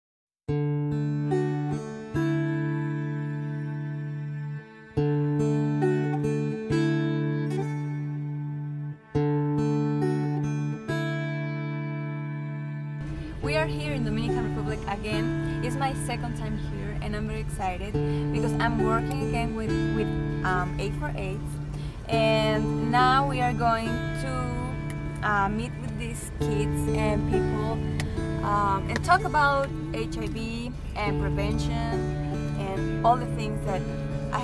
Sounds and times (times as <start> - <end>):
Acoustic guitar: 0.5 - 34.4.